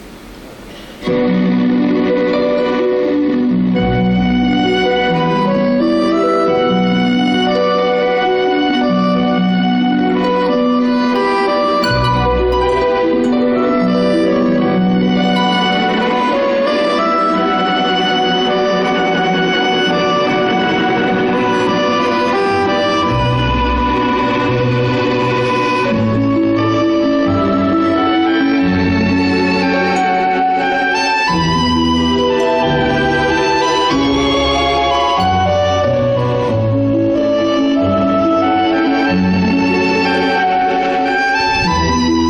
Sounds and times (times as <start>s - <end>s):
Soul music: 1.1s - 19.3s, 19.9s - 42.2s.